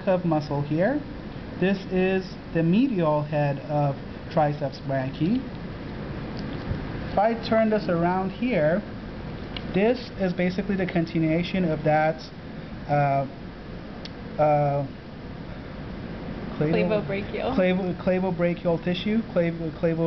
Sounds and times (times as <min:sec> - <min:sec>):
Speech: 0:00.0 - 0:01.0, 0:01.6 - 0:05.5, 0:07.2 - 0:08.9, 0:09.7 - 0:12.3, 0:12.9 - 0:13.4, 0:14.4 - 0:15.0, 0:16.6 - 0:20.0.